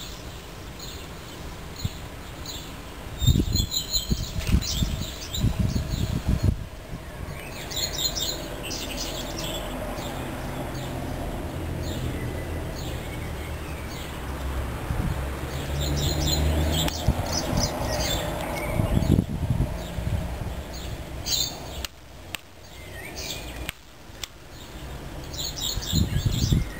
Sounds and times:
Bird: 0.0 - 14.3, 15.5 - 20.0, 20.6 - 22.0, 22.6 - 23.8, 24.5 - 26.7.

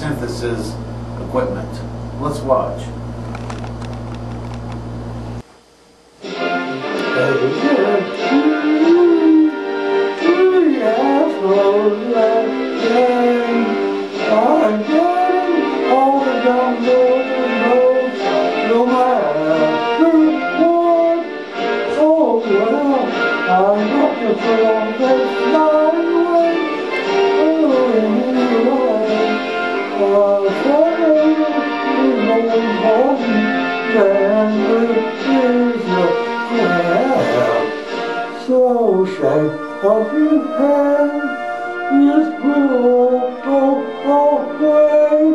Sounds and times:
Music: 0.0 - 0.8, 5.8 - 45.3
Male singing: 6.7 - 37.8, 38.4 - 45.3
Synthetic singing: 7.0 - 9.6, 10.2 - 37.8, 38.4 - 45.3.

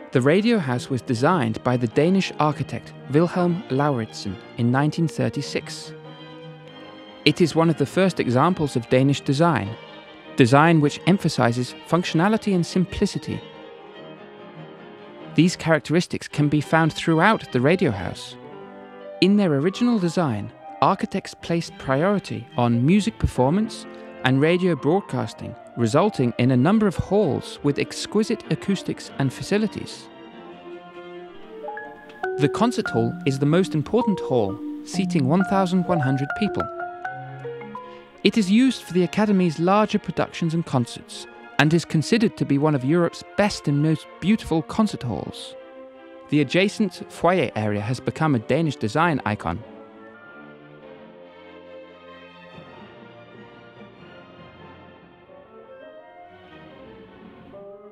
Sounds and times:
Music: 0.0 - 57.9
Speech: 0.1 - 5.9, 7.3 - 9.8, 10.4 - 13.4, 15.4 - 18.4, 19.2 - 30.1, 32.3 - 36.7, 38.2 - 45.5, 46.3 - 49.6.

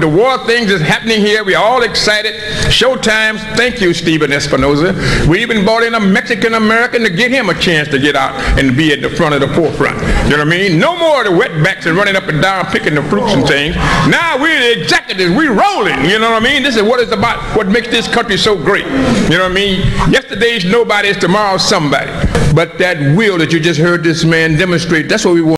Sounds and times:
Male speech, man speaking: 0.0 - 25.5.

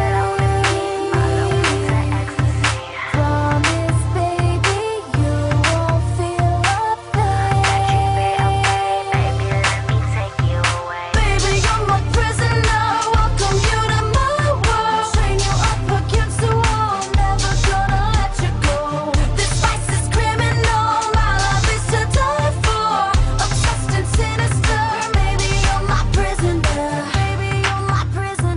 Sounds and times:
Pop music: 0.0 - 28.5.

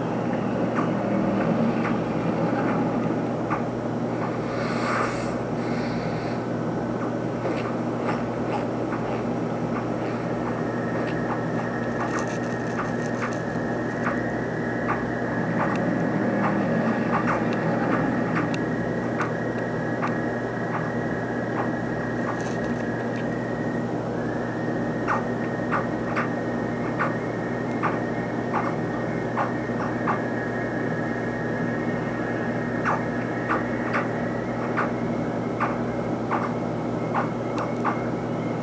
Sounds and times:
Frog: 9.8 - 18.6, 25.0 - 27.2, 27.8 - 30.4, 32.1 - 35.0, 35.6 - 38.0.

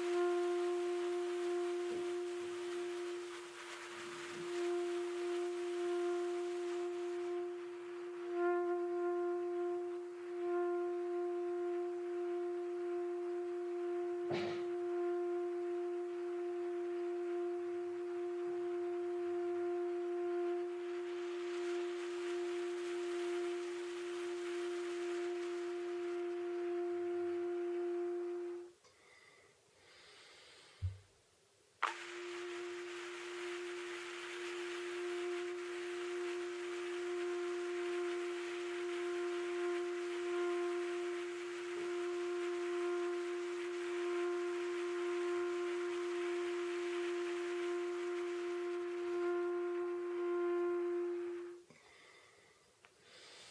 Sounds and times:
Music: 0.0 - 28.8, 31.8 - 51.8.

